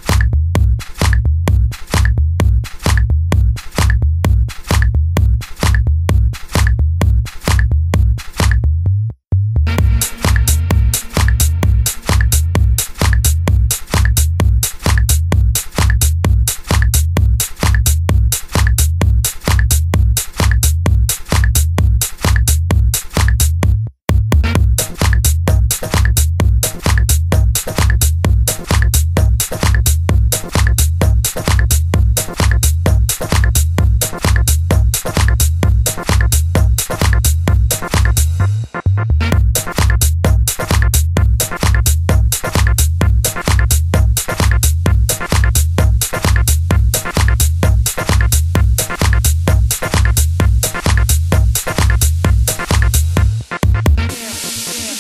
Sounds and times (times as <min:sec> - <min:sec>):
Electronic music: 0:00.0 - 0:08.6, 0:09.7 - 0:23.6, 0:24.4 - 0:55.0.